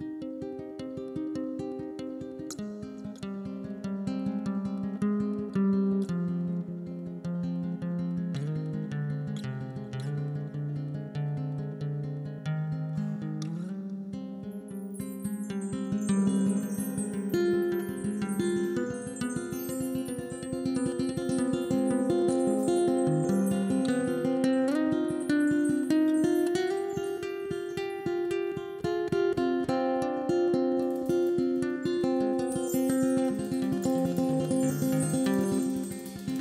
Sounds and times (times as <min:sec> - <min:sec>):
Blues: 0:00.0 - 0:36.4.